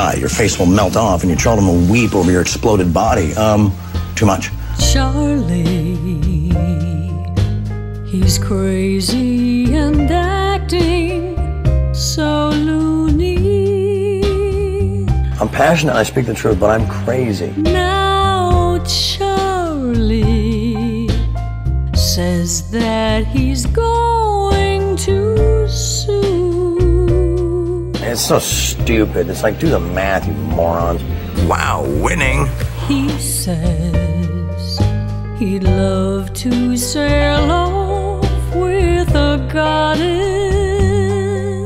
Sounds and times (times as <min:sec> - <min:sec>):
Speech: 0:00.0 - 0:04.6, 0:15.4 - 0:17.8, 0:28.0 - 0:33.4
Tender music: 0:00.0 - 0:41.6.